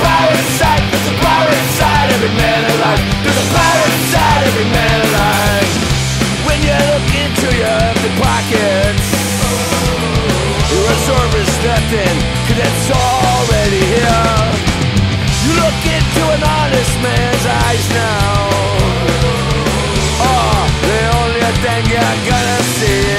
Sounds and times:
Music: 0.0s - 23.1s.

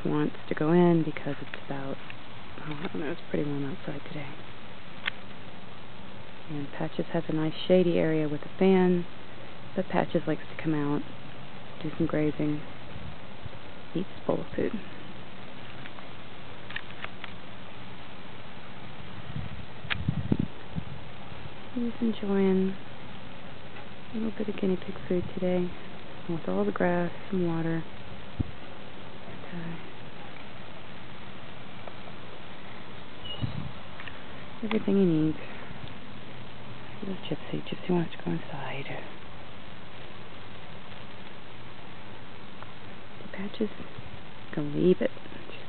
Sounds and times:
Speech: 0.0s - 2.0s, 2.6s - 4.4s, 6.5s - 9.1s, 9.8s - 11.0s, 11.8s - 12.7s, 14.0s - 15.0s, 21.8s - 22.8s, 24.1s - 27.9s, 29.3s - 29.9s, 34.6s - 35.6s, 37.0s - 39.2s, 43.2s - 43.9s, 44.5s - 45.6s.

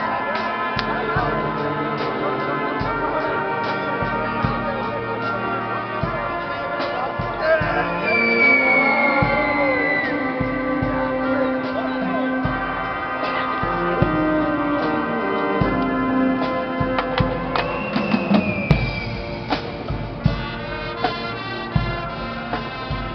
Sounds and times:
Music: 0.0s - 23.1s.

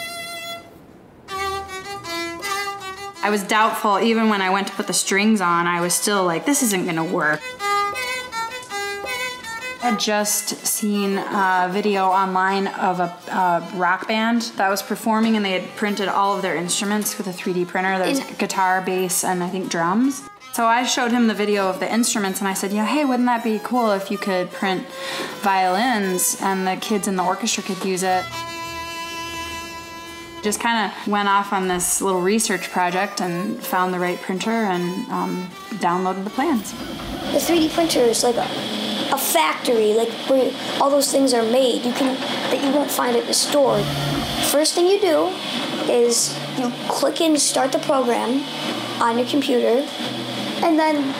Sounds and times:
Violin, fiddle: 1.3s - 51.1s
Speech: 3.2s - 7.4s, 9.8s - 28.2s, 30.4s - 36.7s, 37.3s - 38.5s, 39.1s - 43.9s, 44.5s - 48.4s, 49.0s - 49.9s, 50.6s - 51.1s.

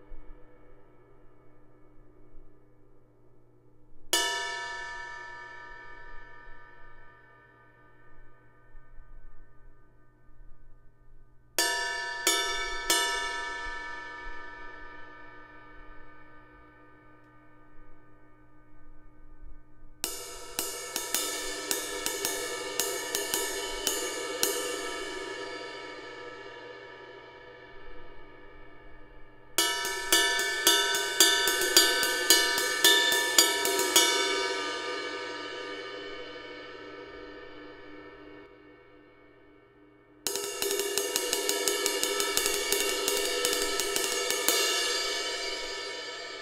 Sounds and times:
Music: 0.0s - 46.4s.

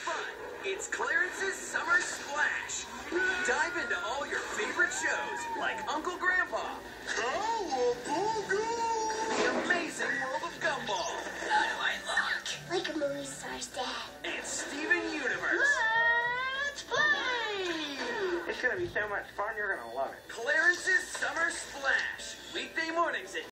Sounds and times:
Music: 0.0s - 23.5s.

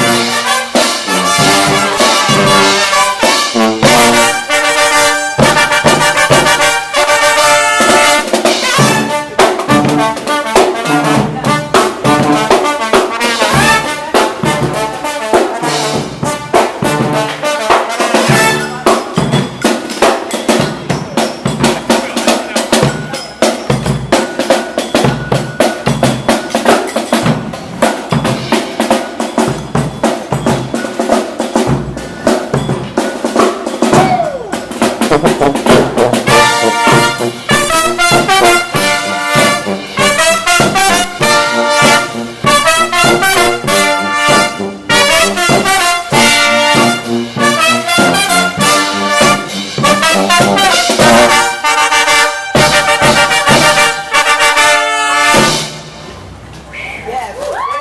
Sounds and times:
Trombone: 0.0s - 19.2s, 34.8s - 56.0s
Trumpet: 0.0s - 19.2s, 33.9s - 56.0s.

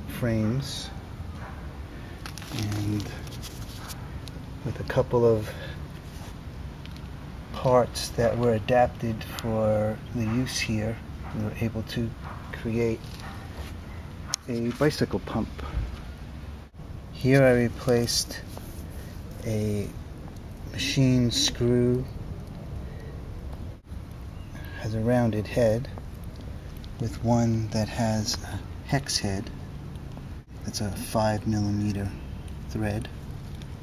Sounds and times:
Speech: 0.0s - 1.0s, 2.5s - 3.3s, 4.6s - 5.7s, 7.5s - 13.0s, 14.4s - 15.7s, 17.2s - 18.5s, 19.4s - 20.0s, 20.7s - 22.1s, 24.6s - 26.0s, 27.0s - 29.5s, 30.6s - 33.1s.

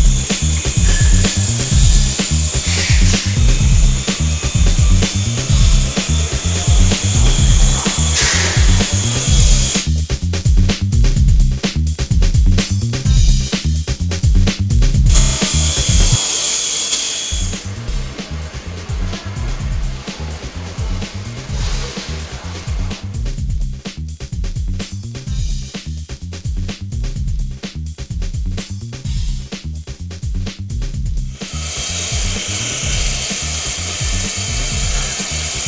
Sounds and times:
Music: 0.0s - 35.6s.

